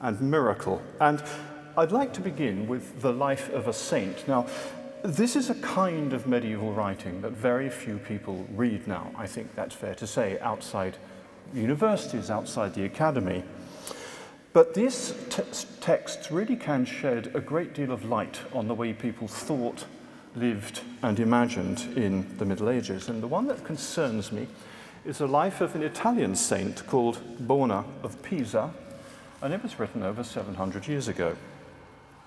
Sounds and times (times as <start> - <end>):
Speech: 0.0 - 13.5, 14.5 - 28.8, 29.4 - 31.5.